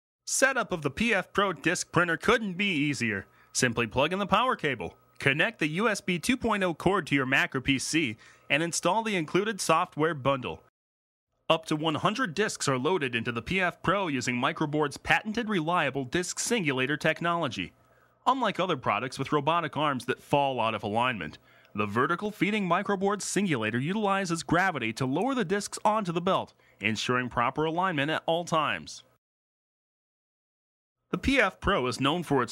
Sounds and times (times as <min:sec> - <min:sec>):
Speech: 0:00.3 - 0:10.7, 0:11.5 - 0:29.2, 0:31.2 - 0:32.5.